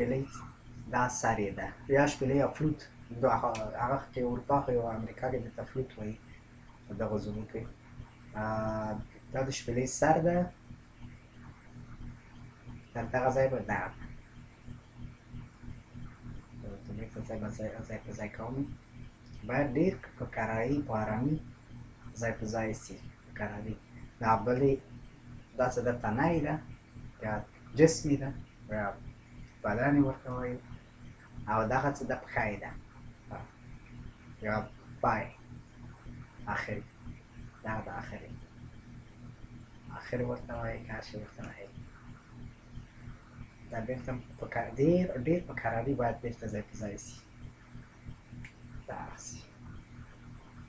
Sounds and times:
Speech: 0.0 - 6.2, 6.9 - 7.7, 8.4 - 10.6, 13.0 - 14.0, 16.6 - 18.8, 19.4 - 21.4, 22.2 - 24.9, 25.6 - 29.0, 29.6 - 30.7, 31.5 - 33.5, 34.4 - 35.4, 36.5 - 36.9, 37.6 - 38.4, 39.9 - 41.8, 43.7 - 47.3, 48.9 - 49.6.

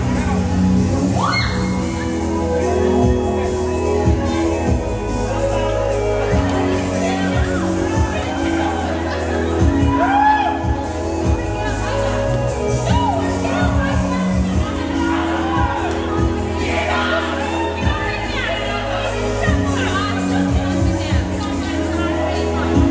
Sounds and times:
Music: 0.0 - 22.9
Speech: 5.1 - 22.9.

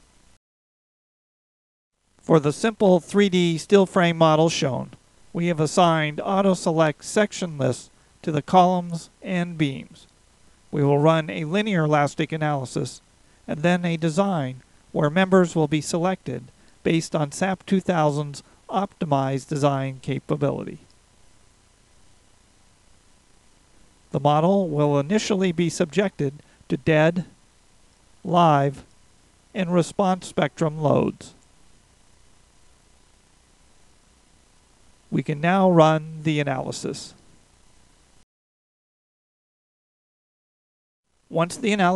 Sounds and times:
Speech: 2.2 - 10.1, 10.7 - 20.9, 24.1 - 27.4, 28.2 - 28.9, 29.6 - 31.4, 35.1 - 37.2, 41.3 - 41.9.

